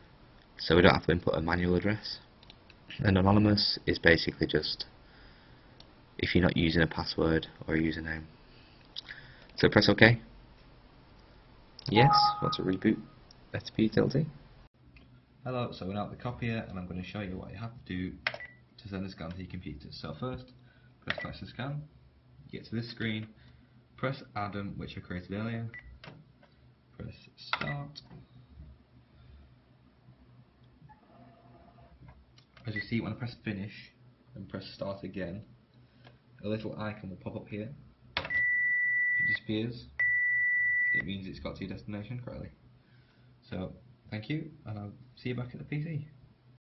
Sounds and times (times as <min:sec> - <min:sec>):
Speech: 0:00.6 - 0:02.3, 0:02.9 - 0:04.9, 0:06.2 - 0:08.3, 0:09.6 - 0:10.3, 0:11.8 - 0:14.4, 0:15.4 - 0:18.2, 0:18.8 - 0:21.9, 0:22.5 - 0:23.4, 0:24.0 - 0:25.8, 0:27.0 - 0:28.0, 0:32.6 - 0:35.5, 0:36.4 - 0:37.8, 0:39.2 - 0:40.0, 0:41.0 - 0:42.6, 0:43.4 - 0:46.2.